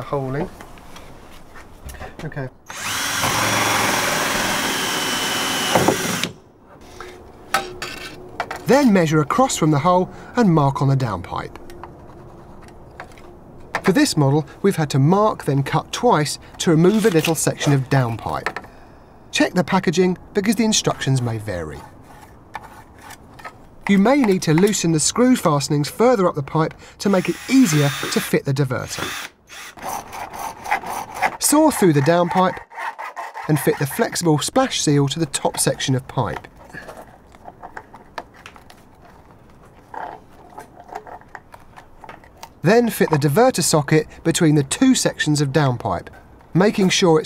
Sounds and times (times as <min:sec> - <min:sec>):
Speech: 0:00.0 - 0:00.5, 0:02.2 - 0:02.6, 0:08.7 - 0:11.6, 0:13.9 - 0:18.6, 0:19.4 - 0:21.9, 0:23.9 - 0:29.1, 0:31.4 - 0:32.6, 0:33.5 - 0:36.5, 0:42.6 - 0:47.2.